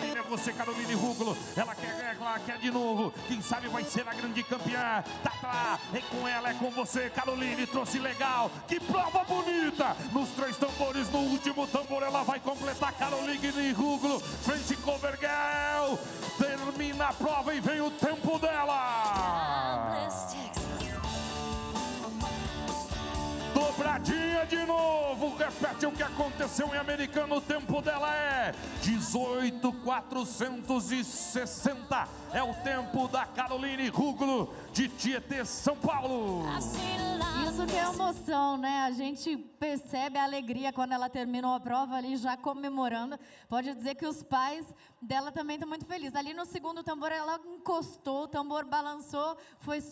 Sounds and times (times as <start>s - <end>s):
Music: 0.0s - 39.0s.